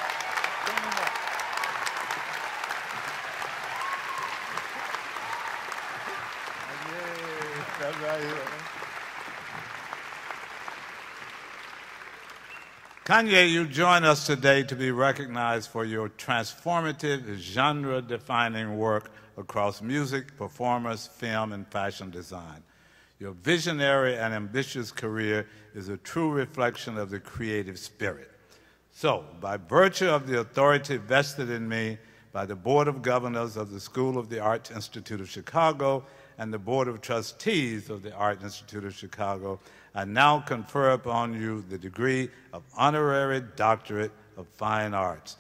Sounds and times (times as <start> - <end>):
Male speech, man speaking: 6.7 - 8.7, 13.1 - 22.6, 23.2 - 28.3, 29.0 - 45.4.